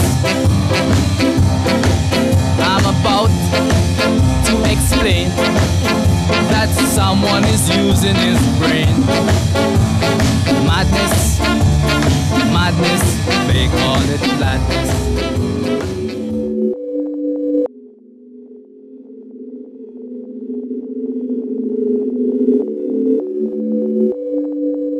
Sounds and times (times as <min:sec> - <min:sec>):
Sine wave: 0:16.5 - 0:24.9.